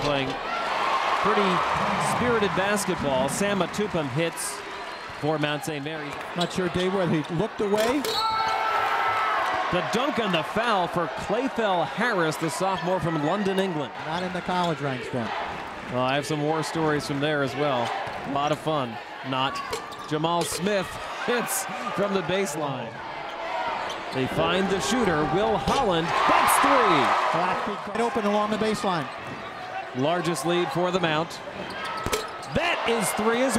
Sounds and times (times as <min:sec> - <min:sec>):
Inside, public space: 0:00.0 - 0:33.5.